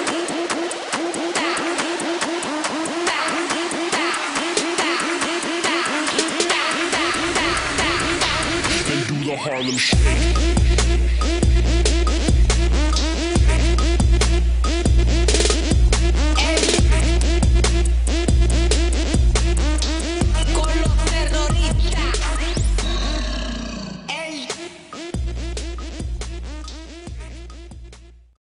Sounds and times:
Music: 0:00.0 - 0:23.5, 0:24.1 - 0:28.4.

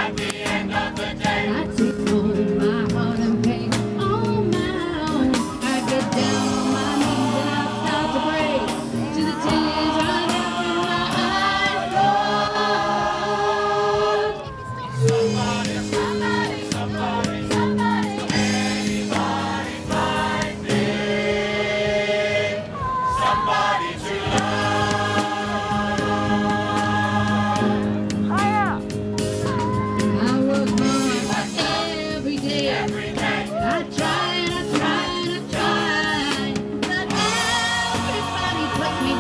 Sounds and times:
Choir: 0:00.0 - 0:28.2, 0:30.5 - 0:39.2.

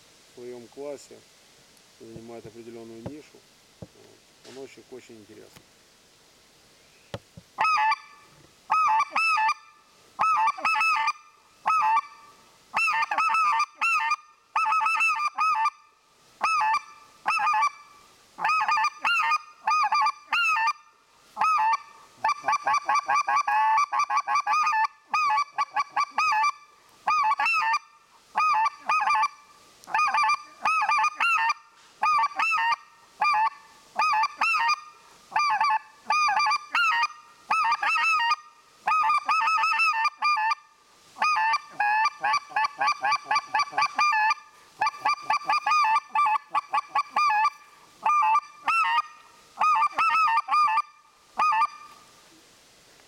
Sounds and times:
Honk: 0:07.6 - 0:15.8, 0:16.4 - 0:17.8, 0:18.4 - 0:40.6, 0:41.2 - 0:52.0.

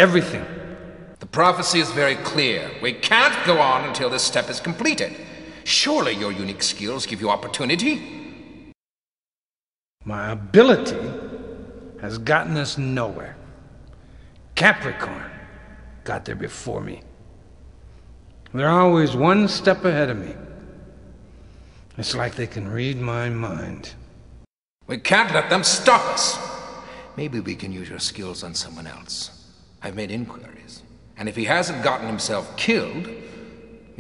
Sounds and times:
Speech: 0:00.0 - 0:00.6, 0:01.2 - 0:08.3, 0:10.0 - 0:11.2, 0:12.0 - 0:13.4, 0:14.6 - 0:17.1, 0:18.5 - 0:20.5, 0:22.0 - 0:24.0, 0:24.9 - 0:33.2.

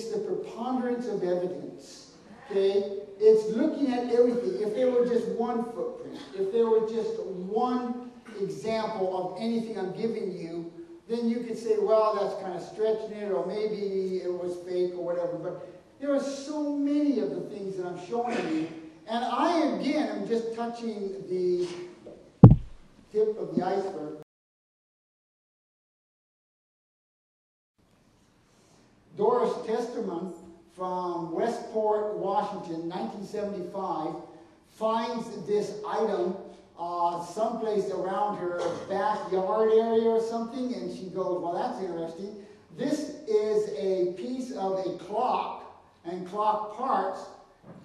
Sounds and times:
Speech: 0:00.0 - 0:22.2, 0:23.1 - 0:24.3, 0:29.2 - 0:47.4.

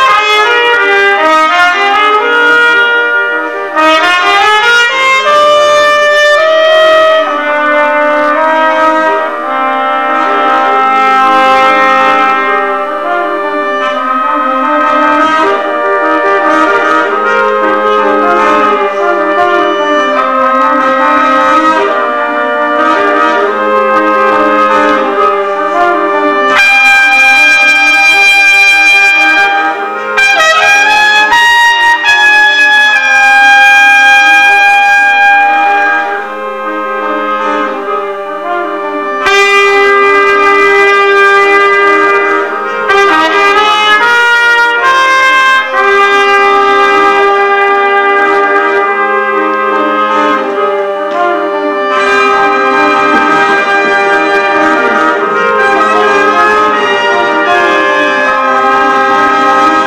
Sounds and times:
Trumpet: 0:00.0 - 0:59.8.

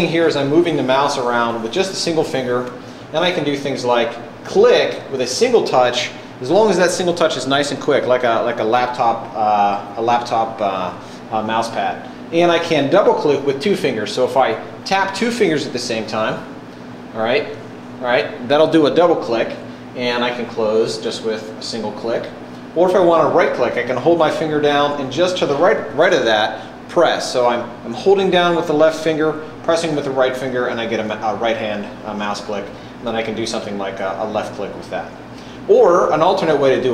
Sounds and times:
Speech: 0:00.0 - 0:16.5, 0:17.1 - 0:36.9.

